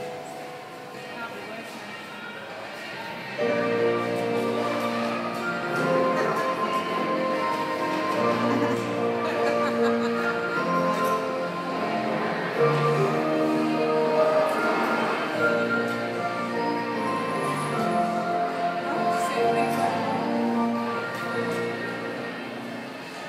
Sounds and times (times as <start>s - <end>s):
Speech: 0.9s - 3.6s, 18.9s - 20.4s.